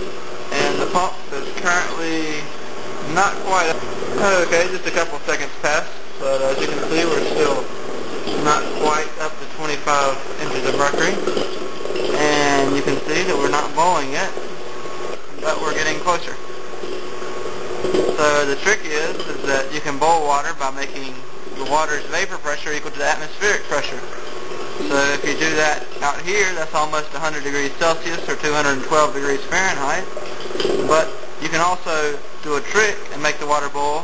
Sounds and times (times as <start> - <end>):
Speech: 0.5 - 2.5, 3.1 - 7.7, 8.4 - 11.3, 12.2 - 14.4, 15.4 - 16.4, 18.2 - 24.2, 24.8 - 30.1, 30.8 - 34.0.